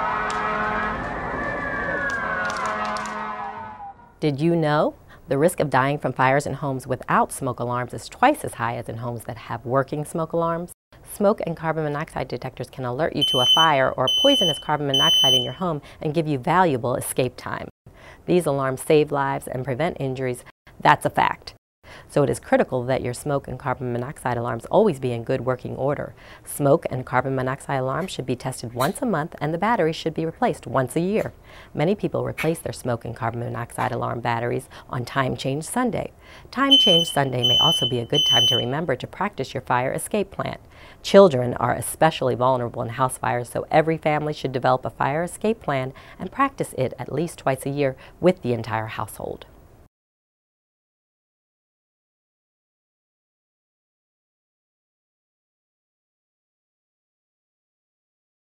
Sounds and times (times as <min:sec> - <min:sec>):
Speech: 0:04.2 - 0:17.7, 0:18.3 - 0:49.5.